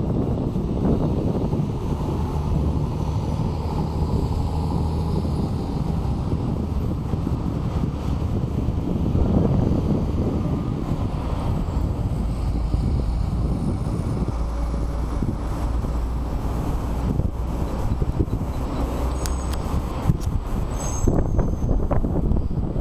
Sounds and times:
Vehicle: 0:00.0 - 0:22.8.

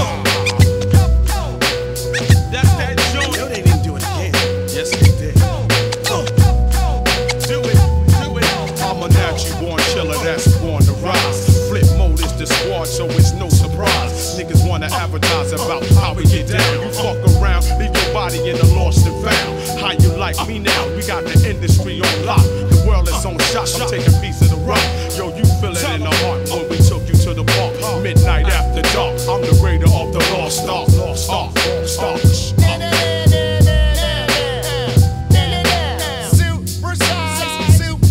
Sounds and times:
Music: 0:00.0 - 0:38.1.

